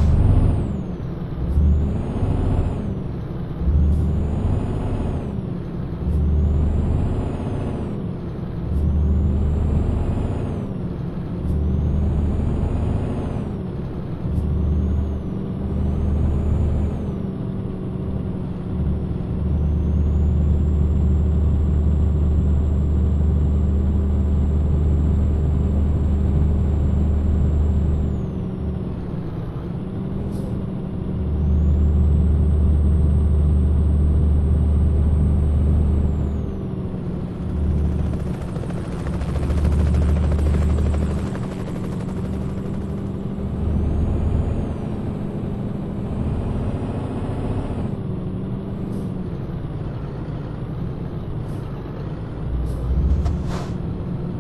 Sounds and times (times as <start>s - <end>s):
Truck: 0.0s - 54.4s.